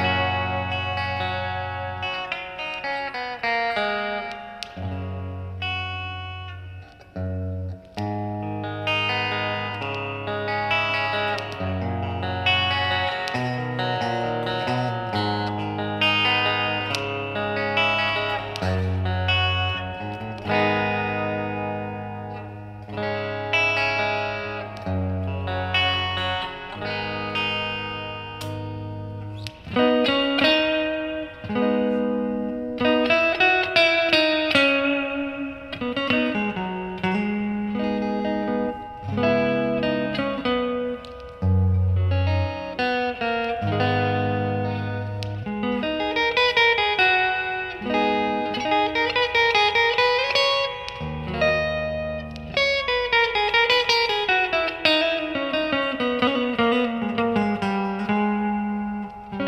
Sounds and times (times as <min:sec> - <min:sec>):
Plucked string instrument: 0:00.0 - 0:59.4.